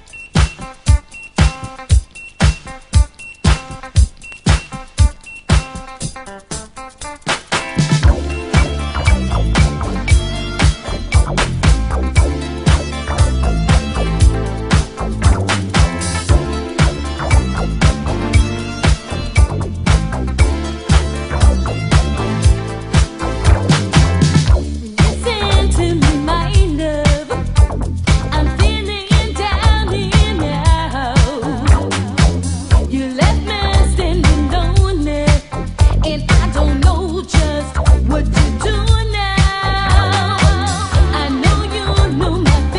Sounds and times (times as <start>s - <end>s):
Music: 0.0s - 42.7s.